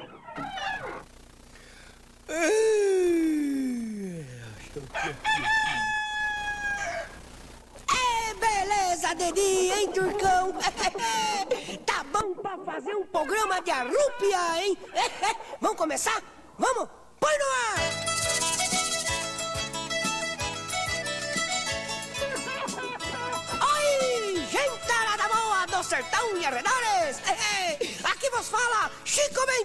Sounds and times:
Speech: 2.3 - 5.9, 7.9 - 14.8, 23.6 - 29.6
Music: 17.8 - 27.8.

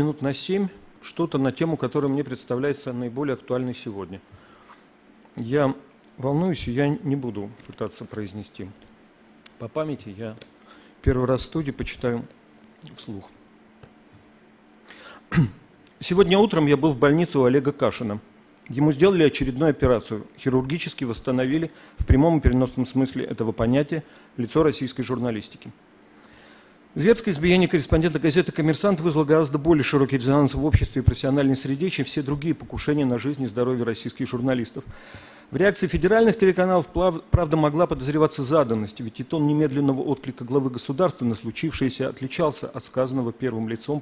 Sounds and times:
Male speech, man speaking: 0.0 - 4.2, 5.4 - 8.8, 9.6 - 13.4, 16.0 - 25.8, 27.0 - 34.9, 35.6 - 44.0.

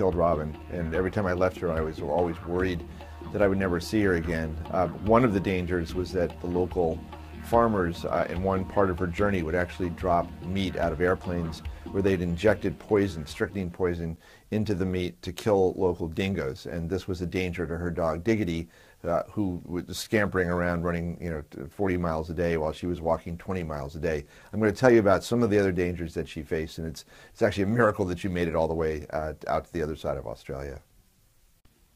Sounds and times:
Speech: 0.0 - 30.9.

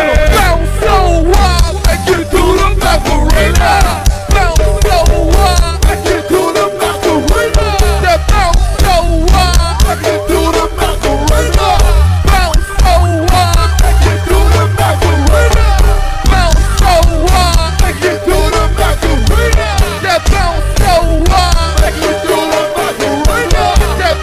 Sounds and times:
Hip hop music: 0.0 - 24.2.

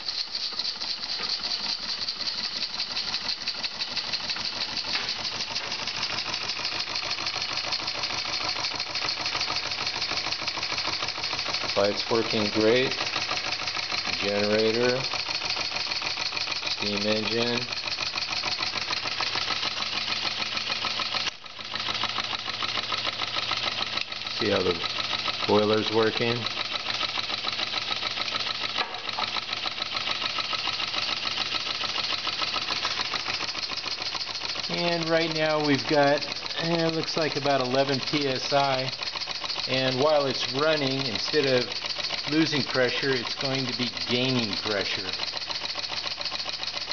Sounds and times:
Engine: 0.0 - 46.9
Speech: 11.8 - 13.0, 14.1 - 15.1, 16.8 - 17.7, 24.4 - 24.8, 25.5 - 26.5, 34.7 - 38.9, 39.7 - 41.7, 42.3 - 45.2.

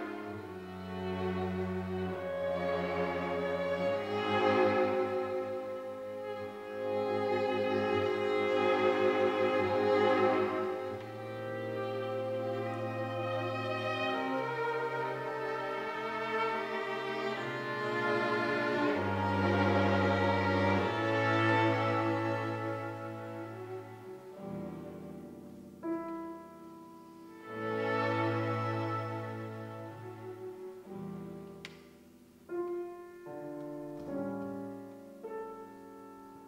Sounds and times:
Violin, fiddle: 0.0 - 31.8.

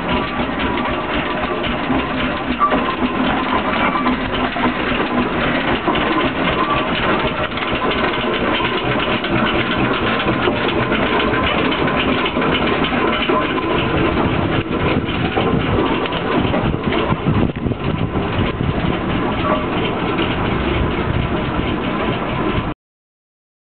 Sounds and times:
Vehicle: 0.0 - 22.8.

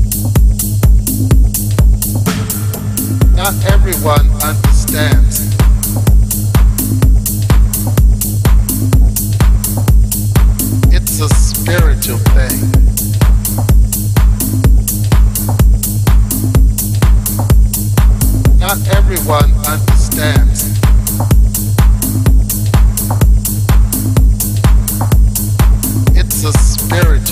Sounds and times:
Music: 0.0 - 27.3.

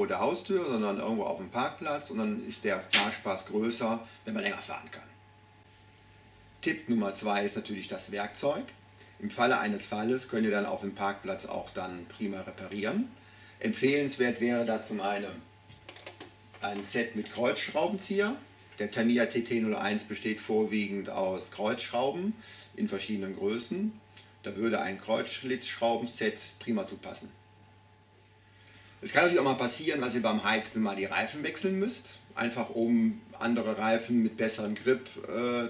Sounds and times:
Speech: 0.0 - 5.2, 6.6 - 15.5, 16.6 - 27.4, 29.0 - 35.6.

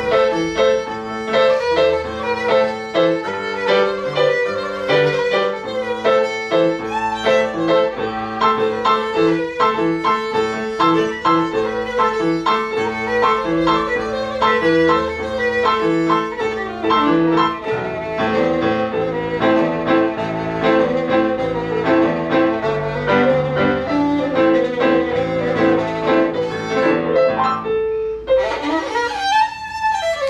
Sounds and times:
Violin, fiddle: 0.0 - 30.2.

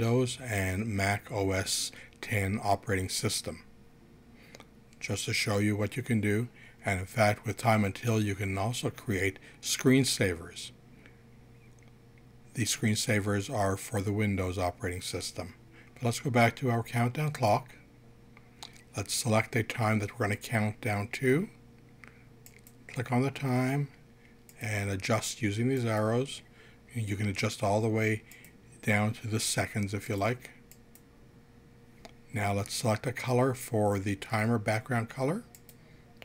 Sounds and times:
Speech: 0.0 - 3.7, 5.0 - 10.8, 12.5 - 17.8, 18.9 - 21.6, 22.9 - 24.0, 24.6 - 30.6, 32.3 - 35.5.

